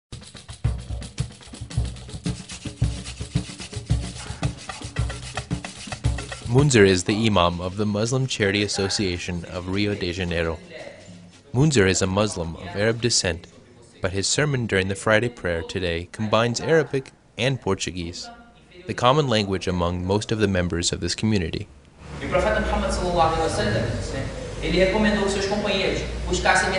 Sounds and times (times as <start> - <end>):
Music: 0.1 - 11.8
Inside, large room or hall: 2.4 - 6.1
Speech: 6.5 - 26.7.